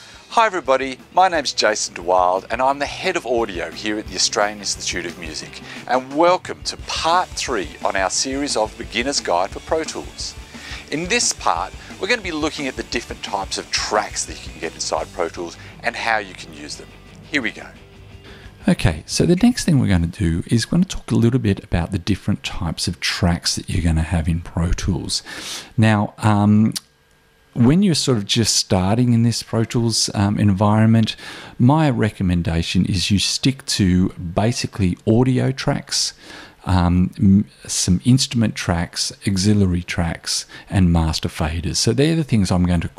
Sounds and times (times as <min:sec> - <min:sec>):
Speech: 0:00.3 - 0:17.8, 0:18.6 - 0:26.9, 0:27.6 - 0:42.9.